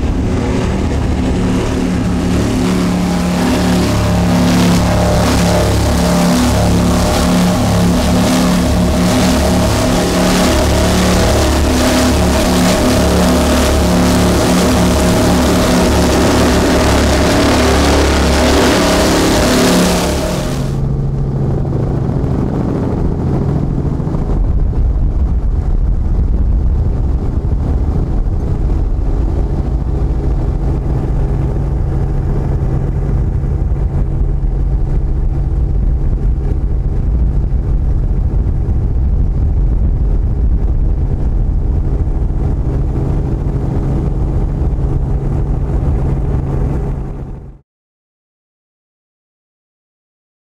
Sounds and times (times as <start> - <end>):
Boat, Water vehicle: 0.0 - 47.6
Wind noise (microphone): 0.0 - 47.6.